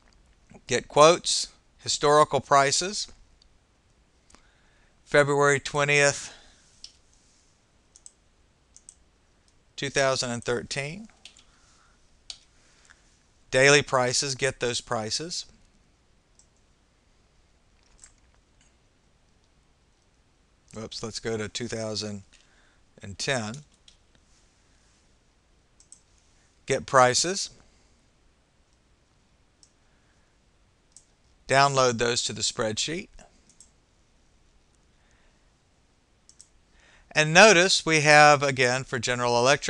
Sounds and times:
Speech: 0:00.6 - 0:03.2, 0:05.1 - 0:06.4, 0:09.8 - 0:11.1, 0:13.6 - 0:15.5, 0:20.7 - 0:22.3, 0:23.0 - 0:23.7, 0:26.7 - 0:27.6, 0:31.5 - 0:33.2, 0:37.1 - 0:39.6.

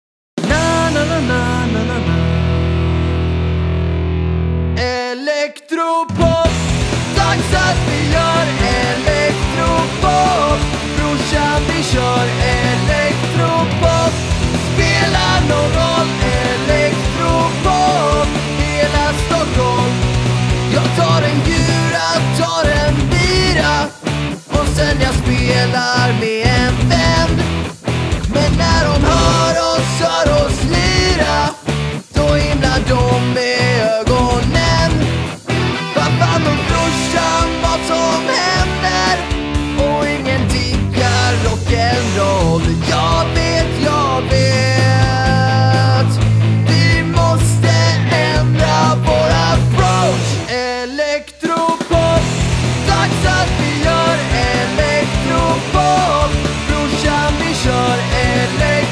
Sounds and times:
Punk rock: 0:00.4 - 0:05.1, 0:06.1 - 0:58.9.

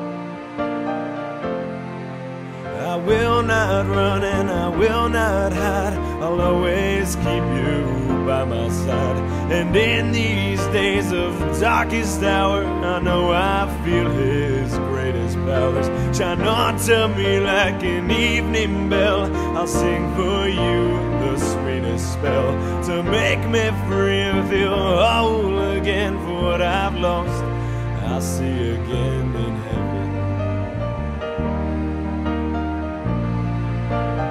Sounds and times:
Music: 0:00.0 - 0:34.3.

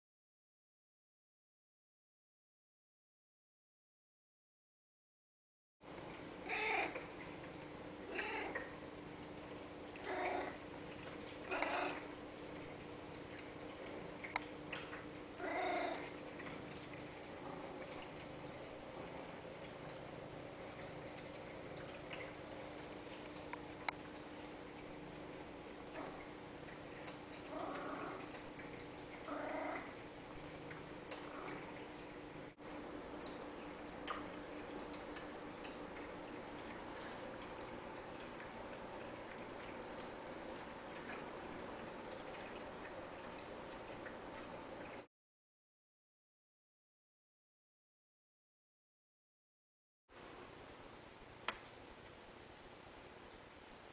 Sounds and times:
Cat: 0:06.5 - 0:07.0, 0:08.1 - 0:08.8, 0:10.0 - 0:10.6, 0:11.5 - 0:12.1, 0:15.4 - 0:16.2, 0:27.5 - 0:28.3, 0:29.3 - 0:30.0.

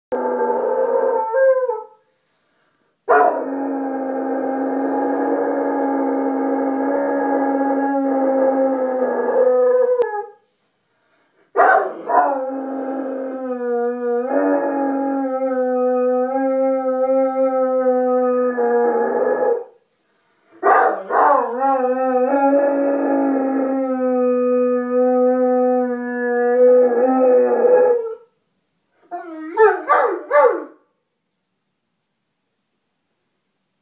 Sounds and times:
Howl: 0:00.1 - 0:02.0, 0:03.1 - 0:10.4, 0:11.6 - 0:19.8, 0:20.6 - 0:28.4, 0:29.0 - 0:30.8.

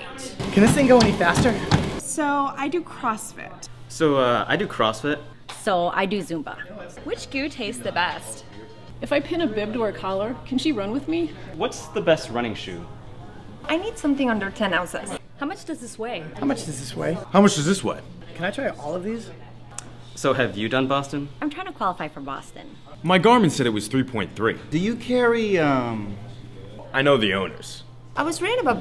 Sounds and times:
Inside, public space: 0:00.0 - 0:28.8.

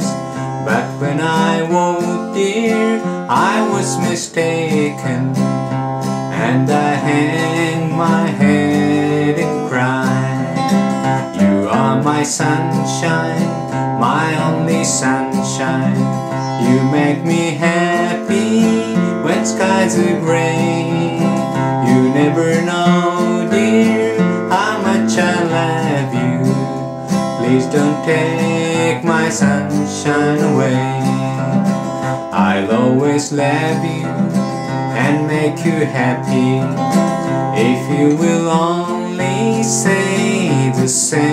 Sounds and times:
Male singing: 0:00.0 - 0:05.4, 0:06.3 - 0:26.6, 0:27.4 - 0:31.6, 0:32.3 - 0:34.2, 0:34.9 - 0:36.9, 0:37.5 - 0:41.3
Music: 0:00.0 - 0:41.3.

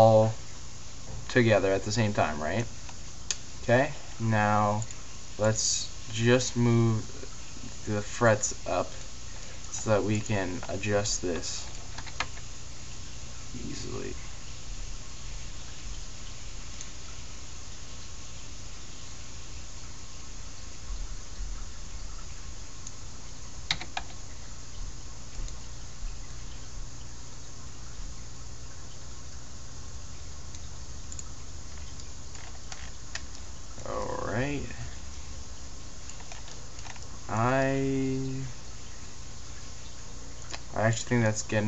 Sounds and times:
Speech: 0:00.0 - 0:00.4, 0:01.3 - 0:02.7, 0:03.6 - 0:09.0, 0:09.8 - 0:11.7, 0:13.5 - 0:14.3, 0:33.8 - 0:35.0, 0:37.3 - 0:38.6, 0:40.7 - 0:41.6
Inside, small room: 0:00.0 - 0:41.6.

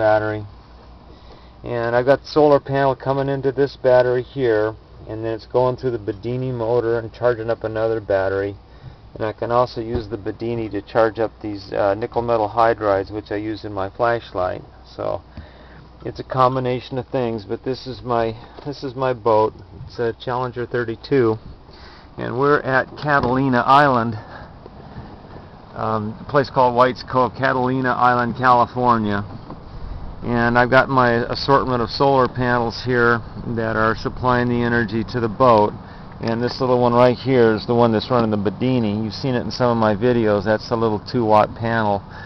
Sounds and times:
Speech: 0:00.0 - 0:00.5, 0:01.6 - 0:08.6, 0:09.2 - 0:15.2, 0:16.0 - 0:21.4, 0:22.2 - 0:24.3, 0:25.8 - 0:29.3, 0:30.2 - 0:42.1.

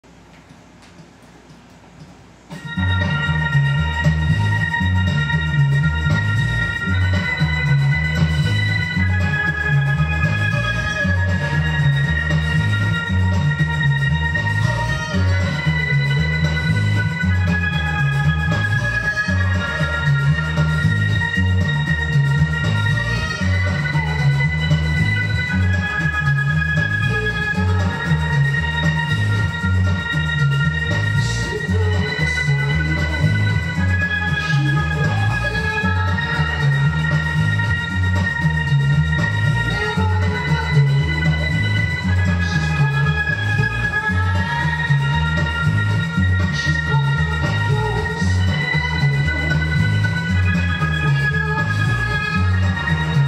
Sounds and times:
Bass guitar: 0:02.5 - 0:53.2.

